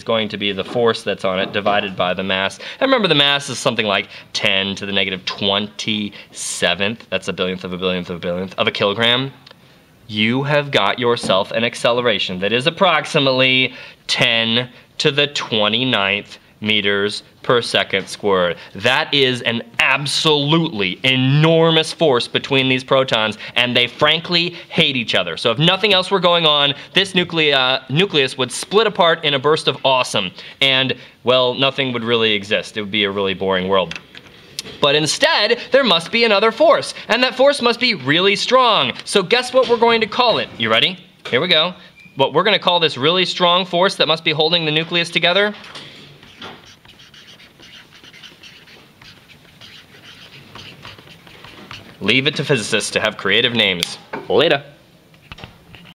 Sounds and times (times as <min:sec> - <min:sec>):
Speech: 0:00.0 - 0:09.5, 0:10.1 - 0:34.0, 0:34.8 - 0:45.6, 0:52.0 - 0:54.8.